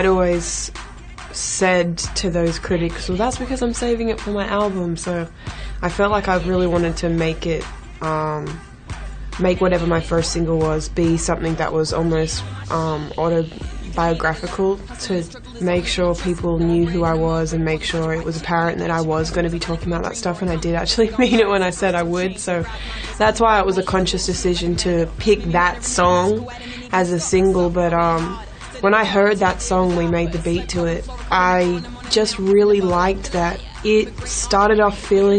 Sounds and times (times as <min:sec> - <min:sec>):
Speech: 0:00.0 - 0:00.8, 0:01.4 - 0:08.6, 0:09.4 - 0:35.3
Music: 0:00.0 - 0:35.3.